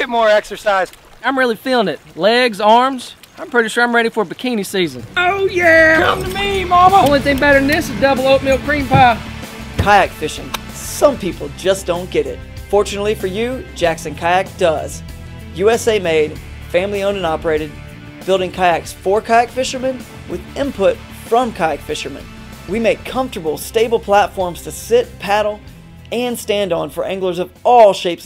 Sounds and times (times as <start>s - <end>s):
Speech: 0.0s - 9.2s, 9.8s - 15.0s, 15.6s - 28.2s
Music: 4.8s - 28.2s.